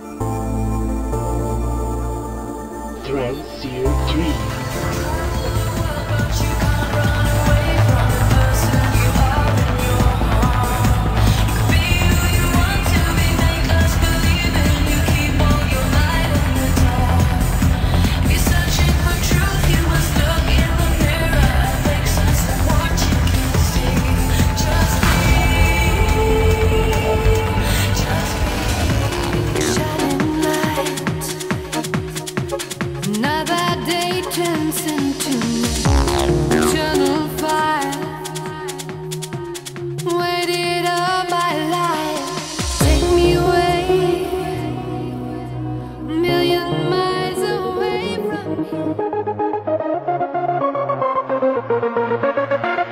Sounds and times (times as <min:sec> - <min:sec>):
Trance music: 0:00.0 - 0:52.9
Dance music: 0:02.8 - 0:52.9.